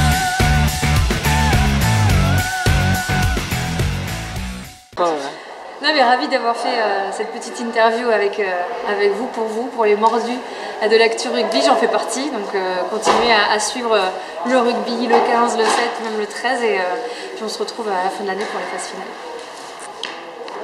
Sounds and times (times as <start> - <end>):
Female speech, woman speaking: 5.0 - 19.2.